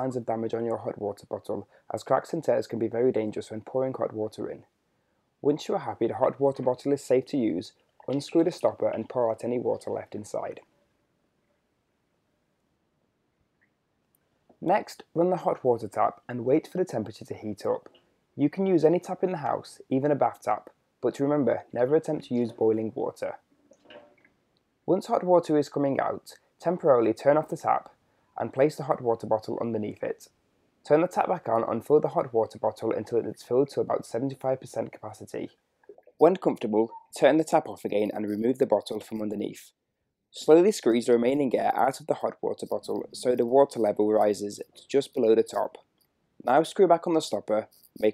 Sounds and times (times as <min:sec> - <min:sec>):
Speech: 0:00.0 - 0:04.7, 0:05.4 - 0:10.7, 0:14.6 - 0:23.4, 0:24.9 - 0:39.7, 0:40.3 - 0:45.8, 0:46.4 - 0:48.1.